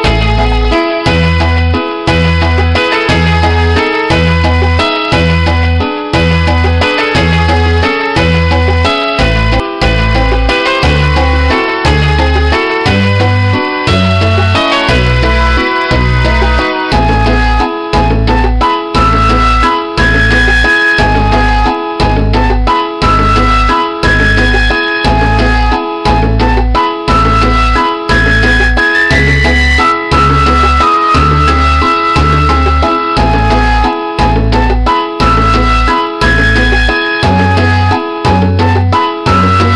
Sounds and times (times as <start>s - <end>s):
Music: 0.0s - 39.7s.